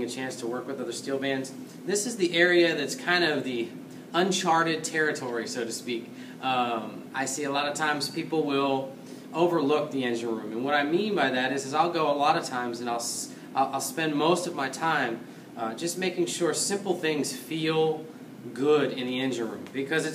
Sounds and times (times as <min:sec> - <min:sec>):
Speech: 0:00.0 - 0:20.1.